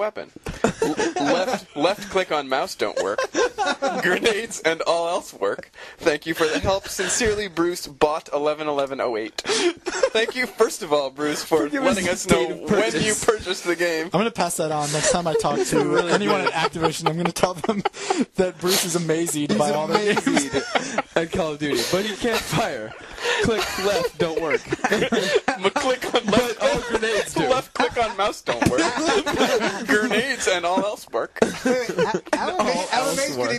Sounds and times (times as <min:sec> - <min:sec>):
Speech: 0:00.0 - 0:09.5, 0:10.1 - 0:33.5.